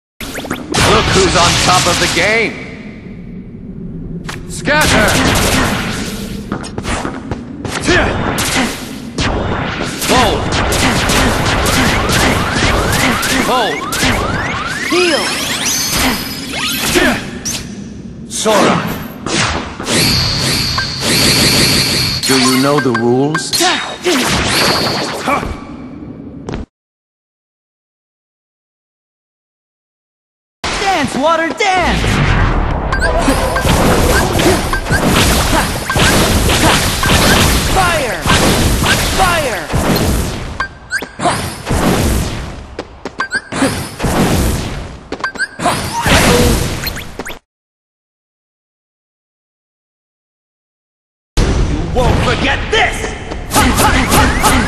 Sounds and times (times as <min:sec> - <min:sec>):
Speech: 0:00.9 - 0:02.6, 0:04.5 - 0:05.2, 0:10.0 - 0:10.4, 0:18.3 - 0:18.9, 0:22.2 - 0:24.2, 0:30.8 - 0:32.0, 0:37.7 - 0:38.4, 0:39.2 - 0:39.7, 0:51.9 - 0:54.6.